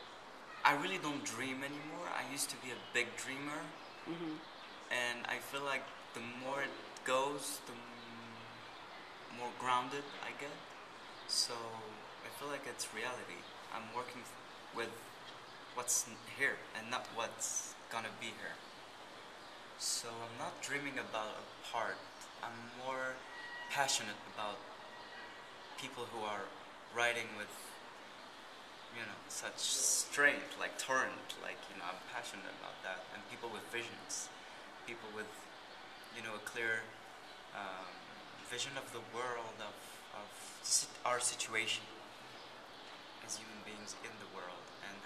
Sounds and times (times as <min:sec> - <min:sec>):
Speech: 0:00.6 - 0:08.6, 0:09.3 - 0:10.6, 0:11.3 - 0:15.0, 0:15.8 - 0:18.6, 0:19.8 - 0:24.6, 0:25.8 - 0:27.7, 0:29.0 - 0:34.3, 0:34.9 - 0:35.4, 0:36.1 - 0:36.9, 0:37.6 - 0:42.0, 0:43.2 - 0:45.0.